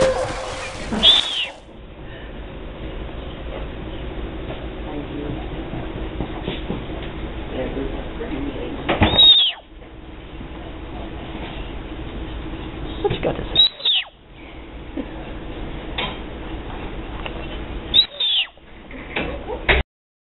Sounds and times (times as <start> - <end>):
Speech: 7.5 - 8.9, 13.0 - 13.6.